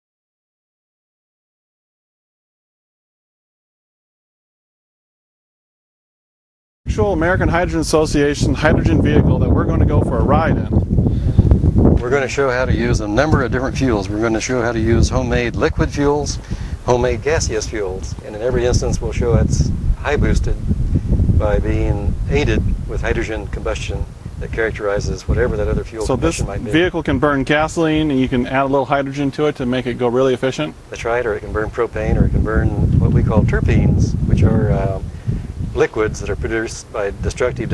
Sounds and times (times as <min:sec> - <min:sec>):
Speech: 0:06.9 - 0:10.8, 0:12.0 - 0:20.6, 0:21.4 - 0:35.1, 0:35.8 - 0:37.7.